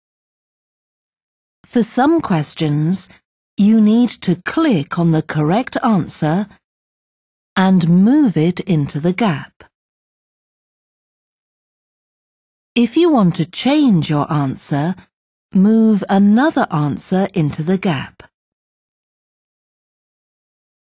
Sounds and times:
Speech: 0:01.7 - 0:06.6, 0:07.6 - 0:09.7, 0:12.8 - 0:18.3.

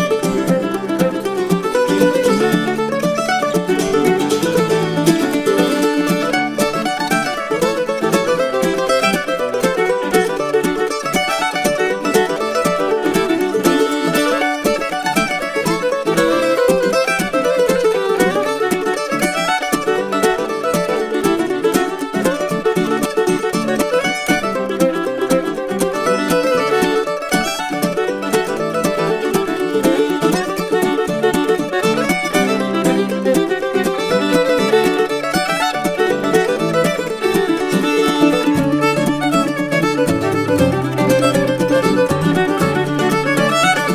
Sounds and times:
Music: 0:00.0 - 0:43.9.

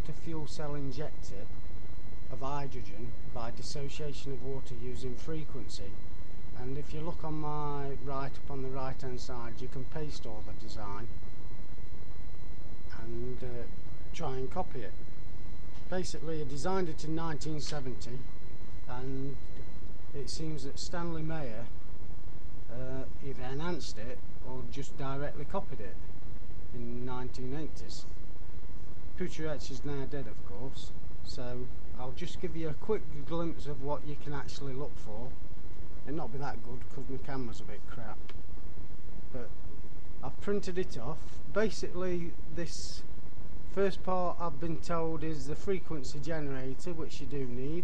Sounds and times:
Speech: 0:00.0 - 0:01.6, 0:02.3 - 0:06.0, 0:06.6 - 0:11.2, 0:12.9 - 0:15.0, 0:15.9 - 0:18.3, 0:18.9 - 0:19.4, 0:20.2 - 0:21.8, 0:22.7 - 0:26.0, 0:26.7 - 0:28.2, 0:29.2 - 0:35.4, 0:36.0 - 0:38.3, 0:39.3 - 0:39.6, 0:40.2 - 0:43.1, 0:43.7 - 0:47.8.

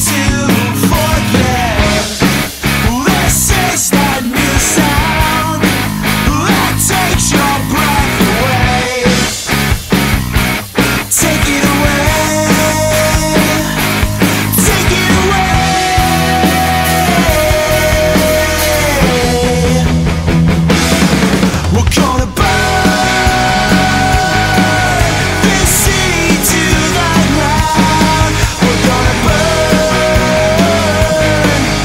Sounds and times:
Grunge: 0:00.0 - 0:31.8.

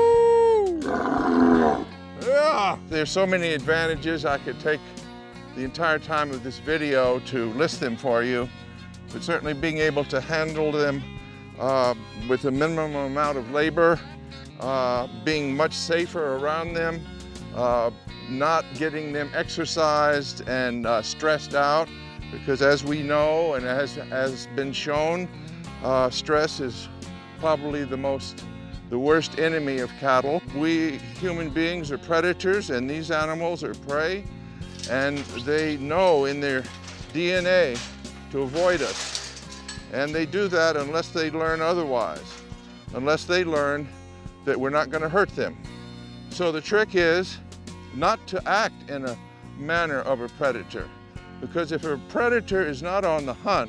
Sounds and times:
Music: 0:00.0 - 0:53.6
Speech: 0:02.2 - 0:04.8, 0:05.6 - 0:08.5, 0:09.2 - 0:11.0, 0:11.6 - 0:14.0, 0:14.6 - 0:17.0, 0:17.6 - 0:26.8, 0:27.4 - 0:28.3, 0:28.9 - 0:34.3, 0:34.9 - 0:39.0, 0:39.9 - 0:42.4, 0:43.0 - 0:43.9, 0:44.5 - 0:45.6, 0:46.4 - 0:47.4, 0:48.0 - 0:53.6.

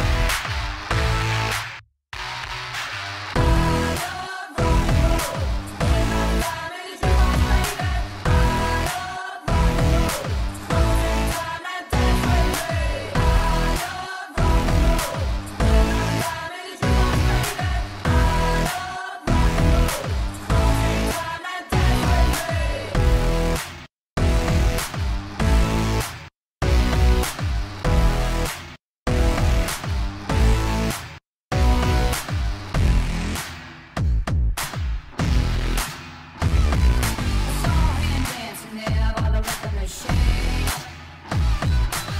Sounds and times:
Music: 0:00.0 - 0:42.1.

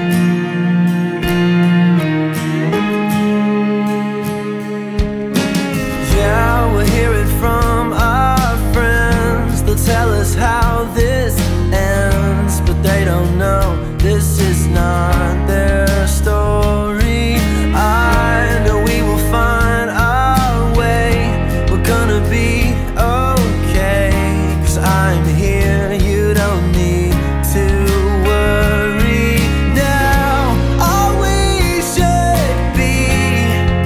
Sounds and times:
Music: 0:00.0 - 0:33.8.

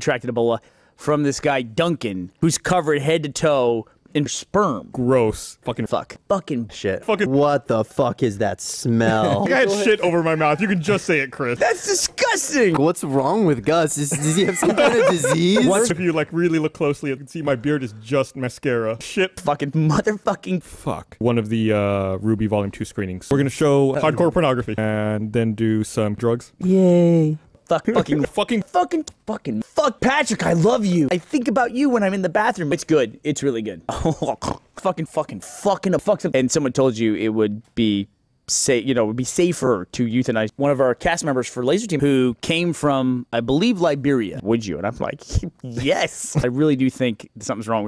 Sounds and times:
Speech: 0:00.0 - 0:47.8.

